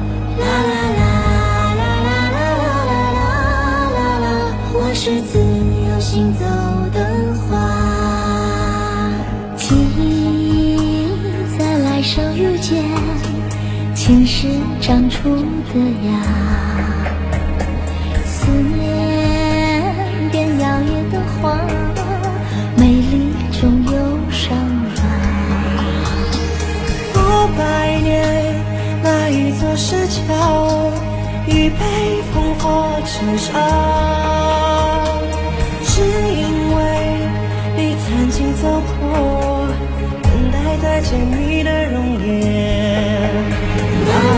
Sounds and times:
Music: 0.0 - 44.3.

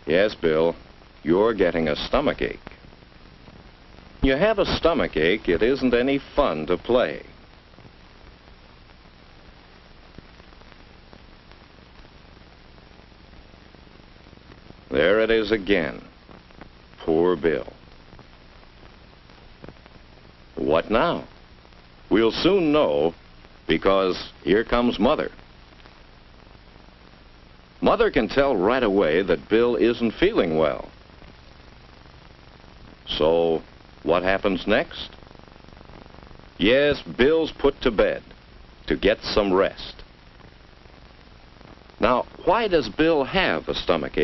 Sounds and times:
Speech: 0.1 - 2.7, 4.2 - 7.3, 14.9 - 16.1, 17.0 - 17.8, 20.6 - 21.3, 22.1 - 25.4, 27.8 - 30.9, 33.1 - 35.2, 36.6 - 38.3, 38.9 - 40.1, 42.0 - 44.2.

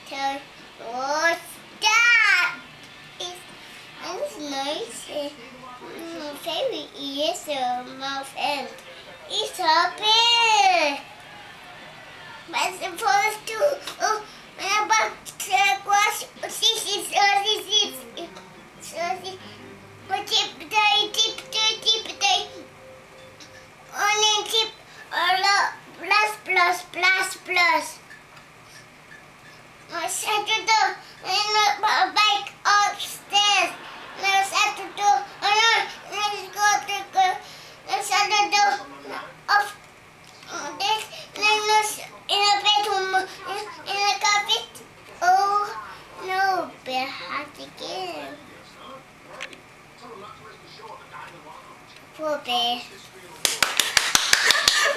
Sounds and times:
Child speech, kid speaking: 0.0 - 2.6, 3.2 - 11.1, 12.3 - 22.7, 23.9 - 28.0, 29.9 - 39.8, 40.4 - 48.6, 52.1 - 53.0.

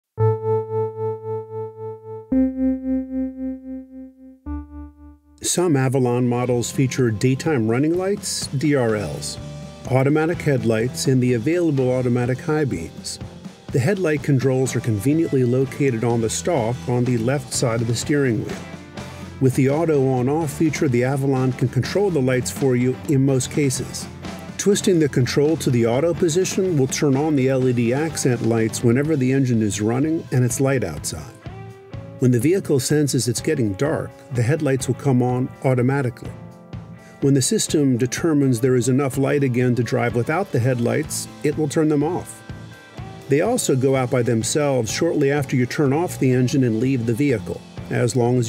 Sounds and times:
Music: 0.2 - 48.4
Speech: 5.4 - 18.6, 19.4 - 31.4, 32.2 - 36.4, 37.2 - 42.4, 43.3 - 48.4.

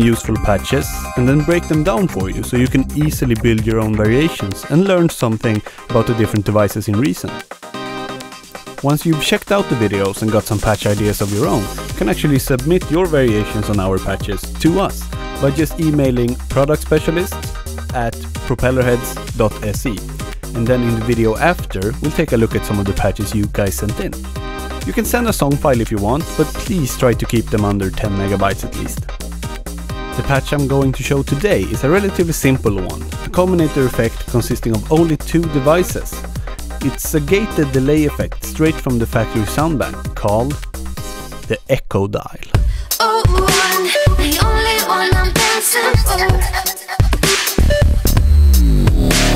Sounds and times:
Speech: 0.0 - 7.4, 8.8 - 20.0, 20.6 - 24.2, 24.9 - 29.0, 30.2 - 40.6, 41.5 - 42.6
Music: 0.0 - 41.7, 42.5 - 49.3.

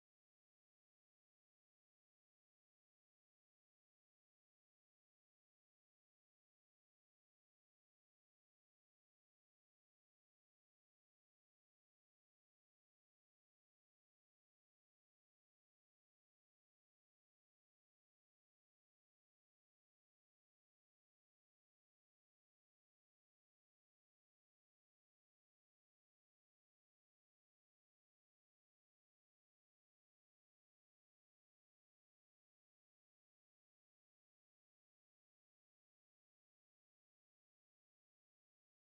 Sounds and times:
Silence: 0.0 - 38.9.

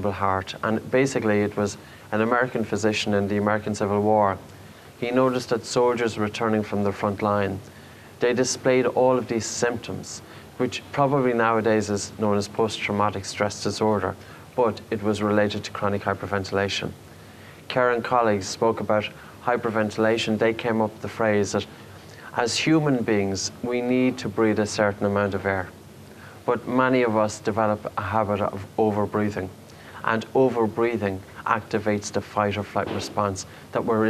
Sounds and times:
Speech: 0.0 - 17.0, 17.7 - 25.8, 26.4 - 34.0.

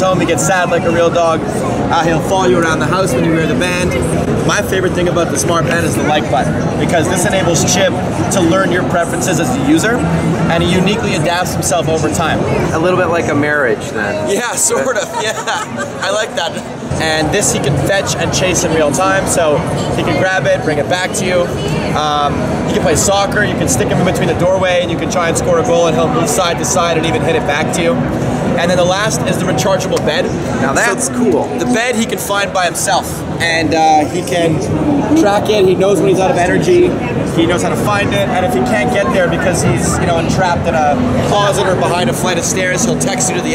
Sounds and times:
Speech: 0.0 - 43.5.

